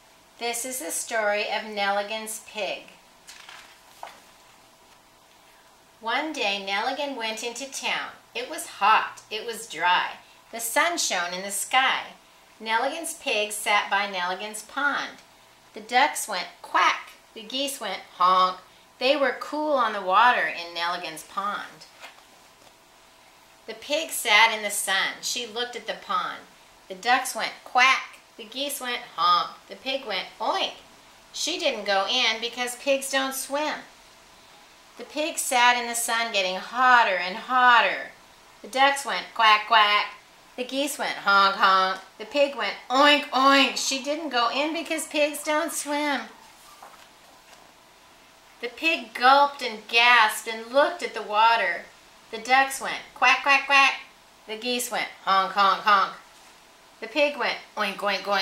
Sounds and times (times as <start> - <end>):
Speech: 0.4 - 3.0, 6.0 - 15.2, 15.8 - 21.9, 23.7 - 30.8, 31.4 - 33.9, 35.0 - 46.4, 48.6 - 56.2, 57.0 - 58.4.